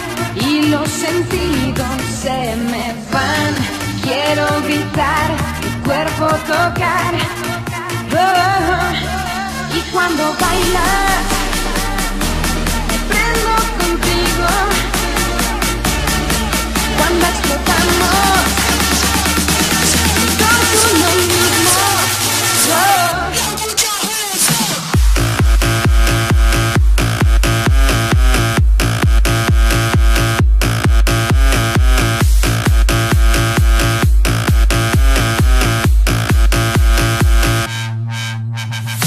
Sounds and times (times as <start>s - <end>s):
Electronica: 0.0s - 39.0s
Techno: 0.0s - 39.0s.